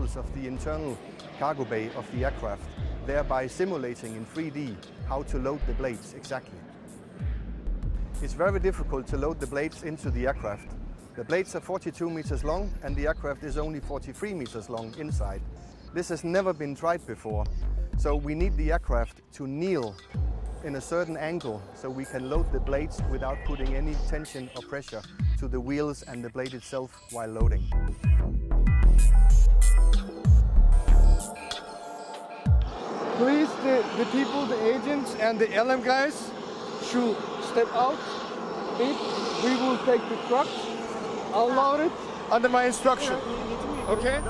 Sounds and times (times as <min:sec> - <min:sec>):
Speech: 0:00.0 - 0:06.6, 0:08.2 - 0:15.4, 0:16.0 - 0:20.0, 0:20.6 - 0:27.6, 0:33.2 - 0:38.0, 0:38.8 - 0:40.6, 0:41.3 - 0:44.2
Fixed-wing aircraft, airplane: 0:00.0 - 0:18.9, 0:19.6 - 0:25.3, 0:28.9 - 0:44.2
Outside, urban or manmade: 0:00.0 - 0:44.2.